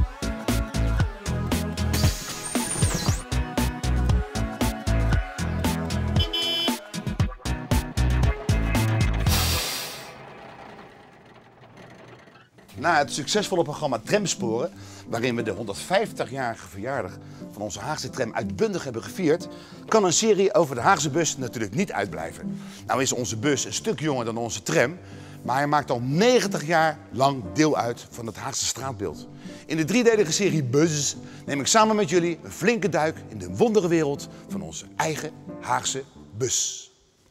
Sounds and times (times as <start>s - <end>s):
Music: 0.0s - 10.1s, 12.6s - 37.3s
Speech: 12.8s - 36.9s.